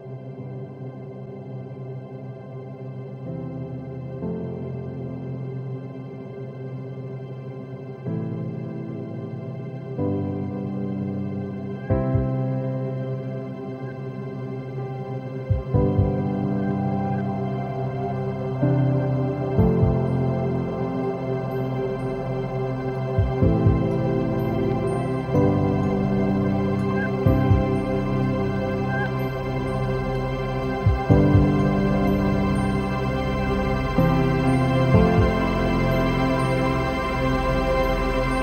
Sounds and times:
Ambient music: 0.0s - 38.4s
New-age music: 0.0s - 38.4s.

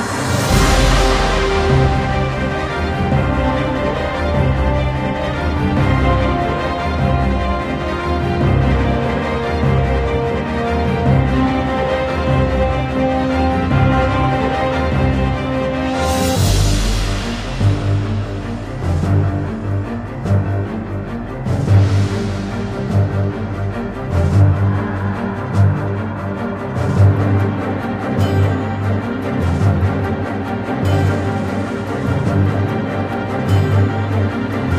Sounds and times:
Soundtrack music: 0.0s - 34.7s.

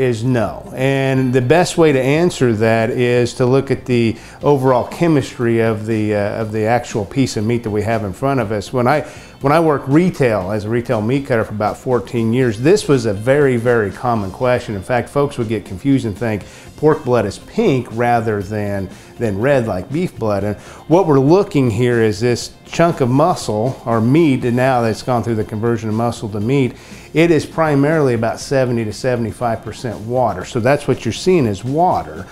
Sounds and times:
Music: 0.0s - 32.3s
Speech: 0.0s - 32.3s.

